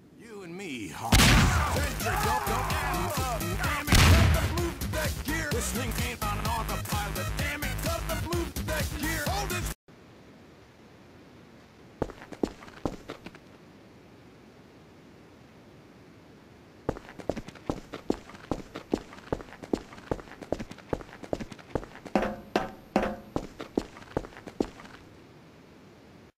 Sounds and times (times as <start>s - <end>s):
Music: 1.5s - 9.8s.